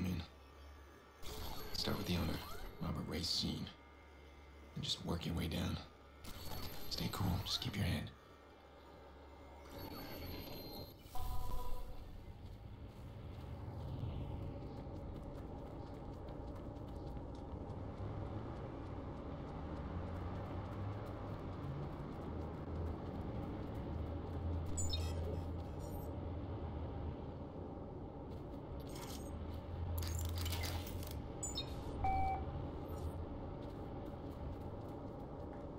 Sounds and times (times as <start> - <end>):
Speech: 1.8 - 3.8, 4.8 - 5.9, 6.9 - 8.2.